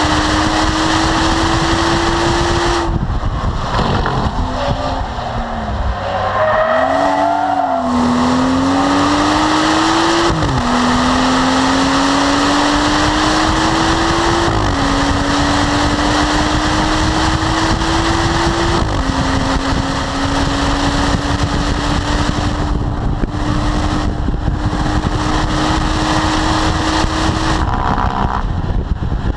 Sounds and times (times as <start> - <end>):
Race car, auto racing: 0.0 - 29.3
Tire squeal: 3.6 - 9.1.